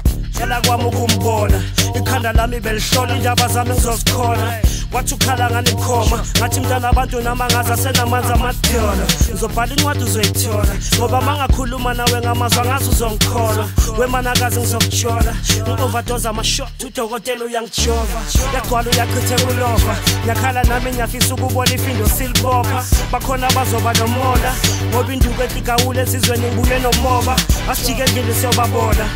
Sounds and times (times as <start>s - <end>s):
Music: 0.0s - 29.1s.